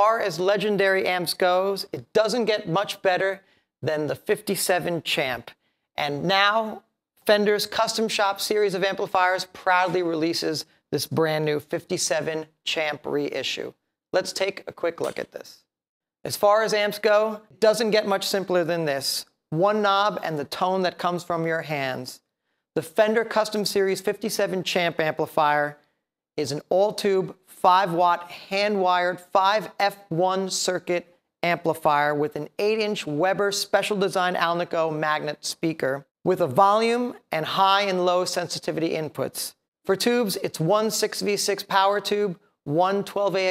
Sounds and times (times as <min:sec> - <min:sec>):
Speech: 0:00.0 - 0:22.2, 0:22.8 - 0:25.8, 0:26.4 - 0:43.5.